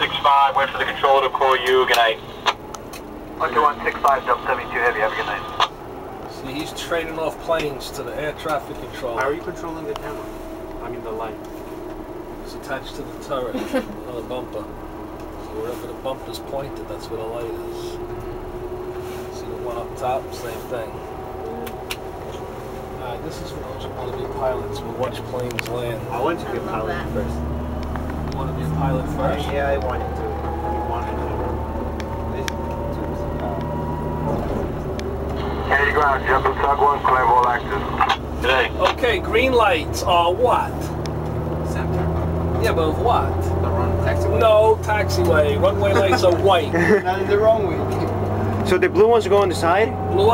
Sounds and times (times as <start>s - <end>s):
Speech: 0.0s - 2.2s, 3.4s - 5.6s, 6.3s - 10.2s, 15.4s - 18.0s, 19.3s - 21.6s, 23.0s - 27.4s, 28.4s - 31.6s, 35.6s - 40.9s, 41.7s - 47.8s
Emergency vehicle: 0.0s - 50.3s.